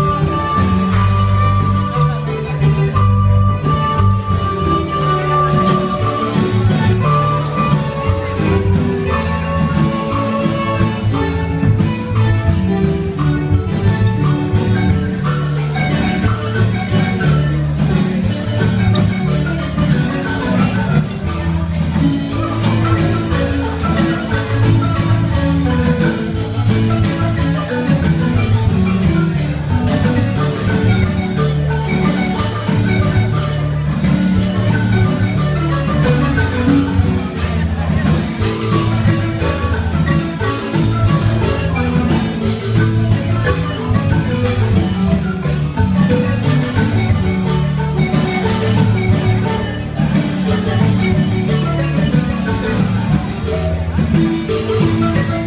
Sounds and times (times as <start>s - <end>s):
Crowd: 0.0s - 55.4s
Marimba, xylophone: 0.0s - 55.4s.